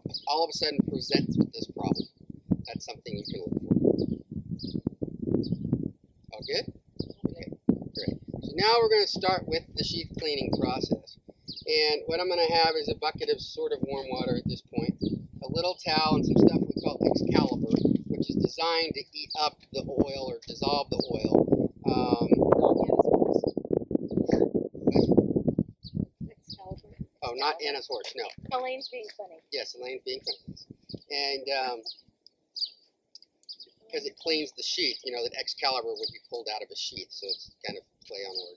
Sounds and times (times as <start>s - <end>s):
Speech: 0.0s - 2.0s, 2.7s - 3.5s, 6.3s - 11.1s, 11.7s - 23.4s, 24.3s - 25.1s, 26.2s - 30.5s, 31.1s - 31.9s, 33.8s - 38.5s
Outside, rural or natural: 0.0s - 38.5s.